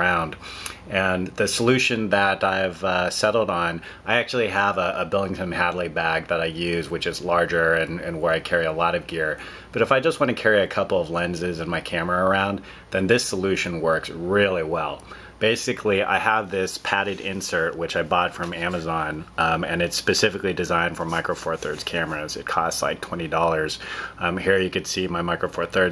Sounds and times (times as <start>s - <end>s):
Speech: 0.0s - 25.9s.